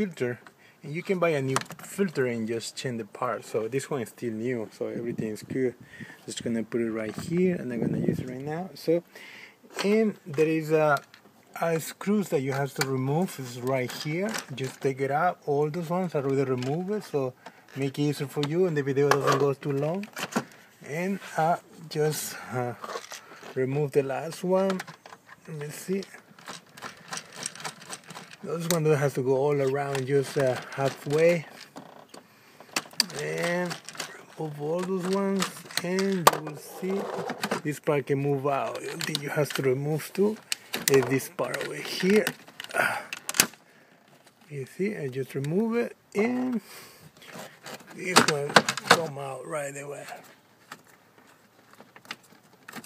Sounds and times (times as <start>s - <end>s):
Speech: 0.0s - 9.1s, 9.7s - 20.1s, 20.8s - 22.9s, 23.6s - 26.2s, 28.4s - 31.5s, 33.0s - 43.0s, 44.5s - 46.6s, 47.9s - 50.3s.